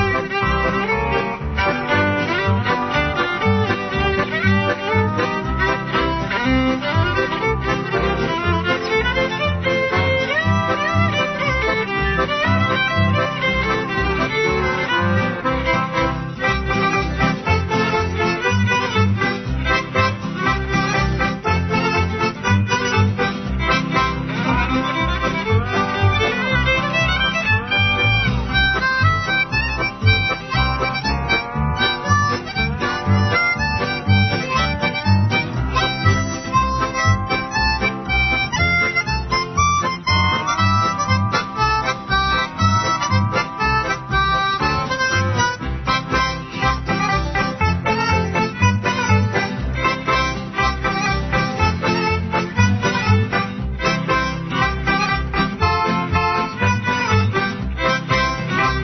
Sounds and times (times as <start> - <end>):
Harmonica: 0.0 - 58.8
Wind instrument, woodwind instrument: 0.0 - 58.8.